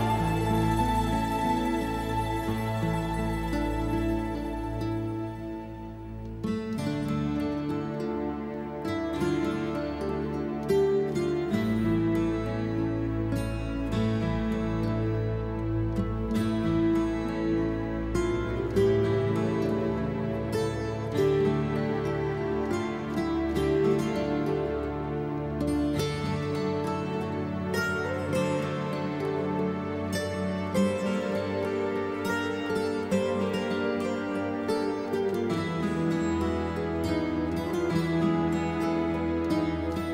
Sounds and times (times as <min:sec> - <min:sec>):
Music: 0:00.0 - 0:40.1.